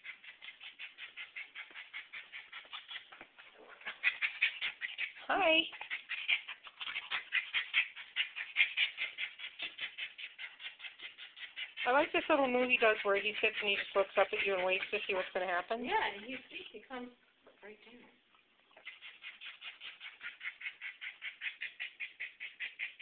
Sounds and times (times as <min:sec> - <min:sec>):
Speech: 0:05.2 - 0:05.7, 0:11.9 - 0:18.1.